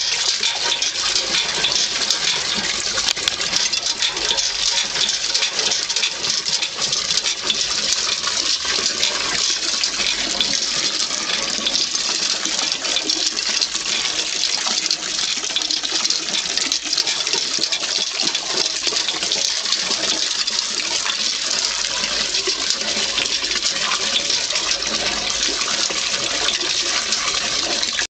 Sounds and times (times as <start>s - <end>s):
Water: 0.0s - 28.1s.